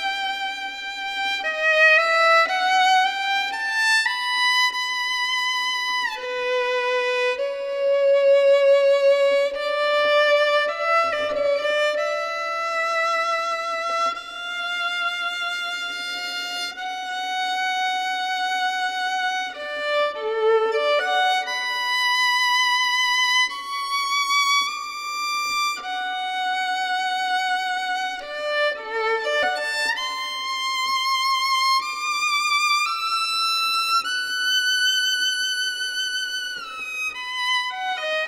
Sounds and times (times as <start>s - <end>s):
Violin, fiddle: 0.0s - 38.2s.